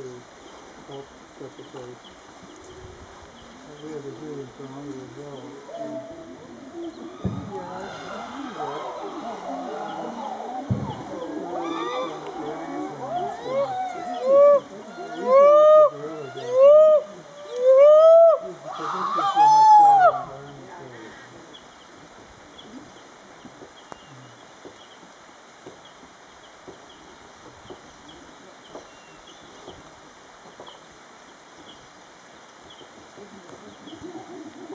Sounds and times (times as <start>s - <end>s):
Rain on surface: 0.0s - 34.7s.